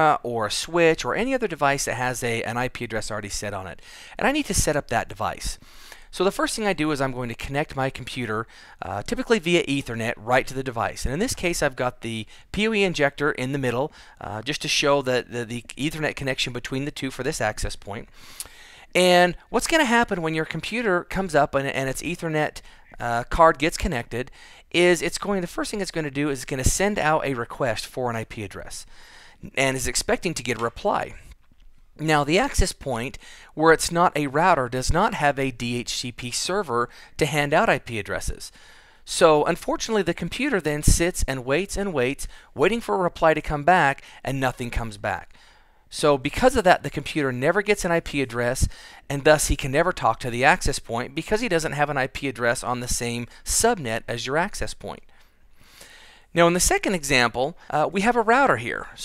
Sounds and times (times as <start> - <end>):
Speech: 0.0 - 18.1, 19.0 - 31.3, 32.0 - 38.5, 39.1 - 45.3, 45.9 - 55.0, 56.4 - 59.0.